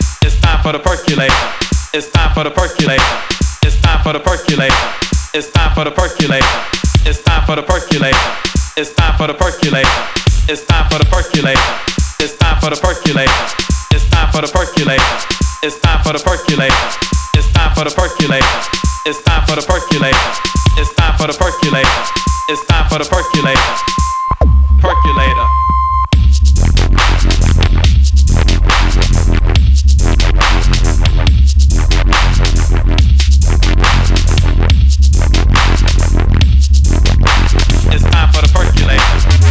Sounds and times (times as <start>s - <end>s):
Dubstep: 0.0s - 25.5s, 26.1s - 39.5s.